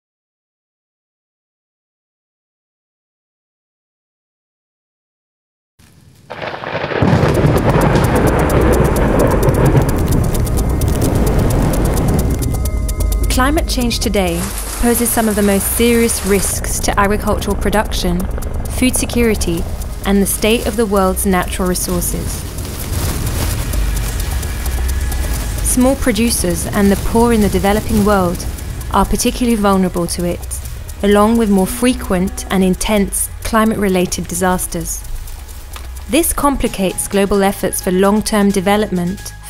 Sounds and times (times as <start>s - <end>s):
Speech: 13.3s - 22.4s, 25.7s - 35.0s, 36.1s - 39.4s.